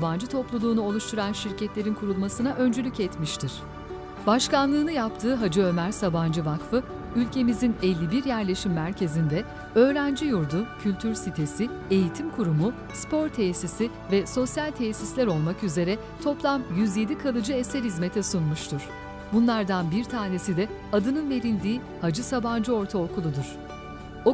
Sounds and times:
Speech: 0.0s - 3.6s, 4.3s - 23.6s
Music: 0.0s - 24.3s.

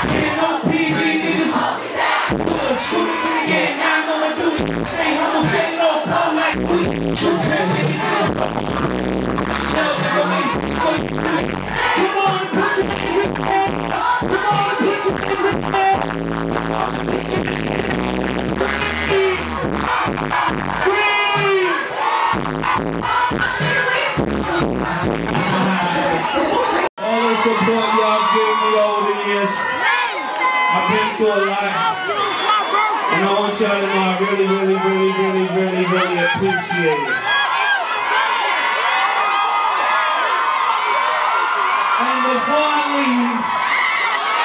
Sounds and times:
Inside, large room or hall: 0.0s - 44.4s
Music: 2.2s - 2.7s, 4.5s - 26.8s.

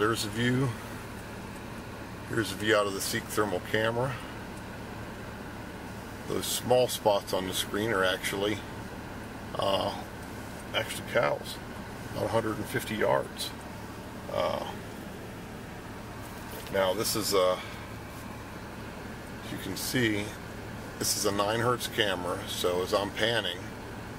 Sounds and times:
Speech: 0.0s - 0.8s, 2.3s - 4.3s, 6.3s - 8.7s, 9.6s - 10.1s, 10.7s - 11.6s, 12.2s - 13.6s, 14.3s - 14.8s, 16.7s - 17.8s, 19.4s - 20.4s, 21.0s - 23.7s.

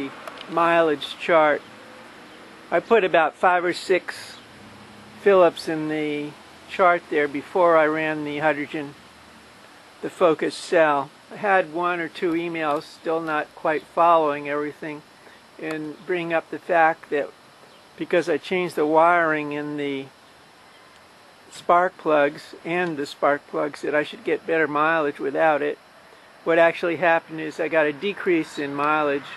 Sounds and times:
Speech: 0.0s - 1.6s, 2.7s - 4.4s, 5.3s - 9.0s, 10.0s - 15.0s, 15.6s - 17.3s, 18.0s - 20.1s, 21.5s - 25.8s, 26.5s - 29.3s.

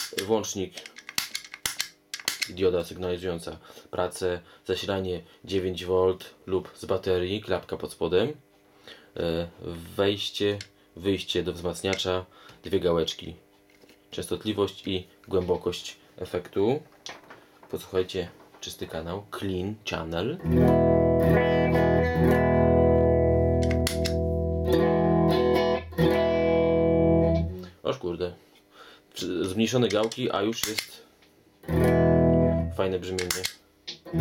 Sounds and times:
Speech: 0.1s - 0.9s, 2.5s - 8.4s, 9.2s - 13.4s, 14.1s - 16.9s, 17.7s - 20.4s, 27.6s - 28.4s, 29.2s - 31.1s, 32.7s - 33.6s.

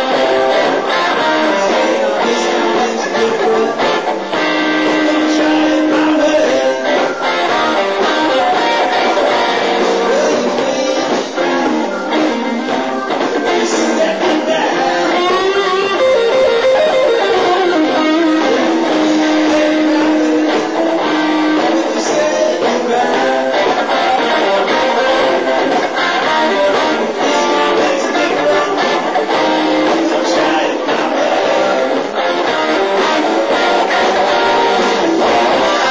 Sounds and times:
Bass guitar: 0.0s - 35.9s
Drum kit: 0.0s - 35.9s
Rock music: 0.0s - 35.9s.

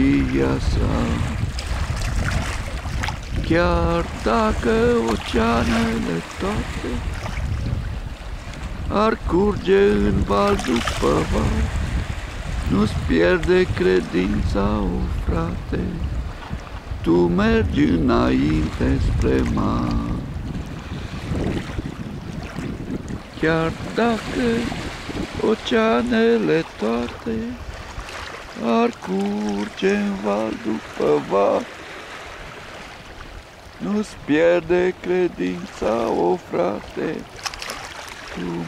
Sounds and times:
Ocean: 0.0s - 38.6s
Rowboat, canoe, kayak: 0.0s - 38.6s.

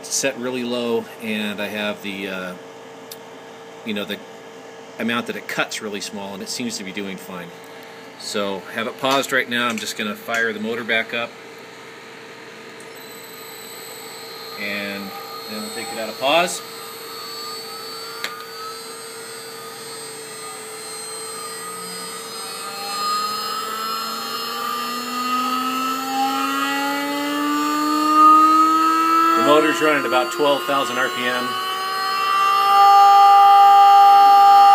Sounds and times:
Speech: 0.0s - 2.6s, 3.9s - 4.2s, 5.0s - 7.6s, 8.2s - 11.4s, 14.6s - 16.6s, 29.4s - 31.6s
Drill: 12.8s - 34.7s.

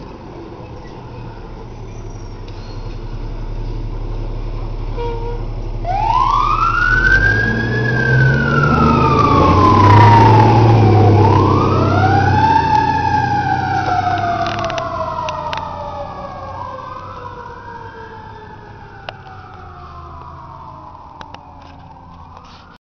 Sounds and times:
Vehicle: 0.0s - 22.8s.

